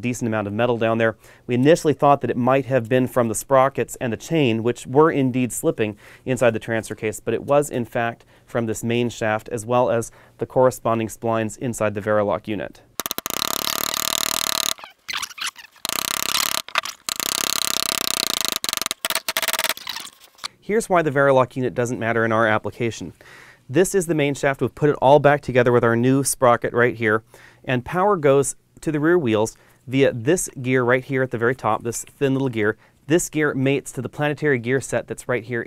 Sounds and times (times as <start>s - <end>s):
Speech: 0.0s - 12.9s, 20.6s - 35.6s.